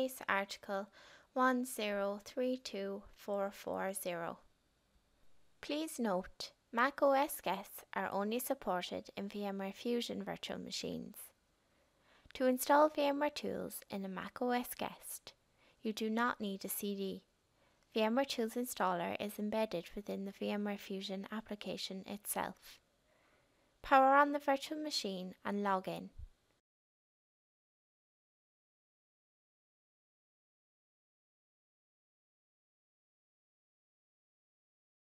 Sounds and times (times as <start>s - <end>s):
Speech: 0.0s - 4.4s, 5.6s - 11.4s, 12.4s - 17.3s, 18.0s - 22.8s, 23.8s - 26.3s.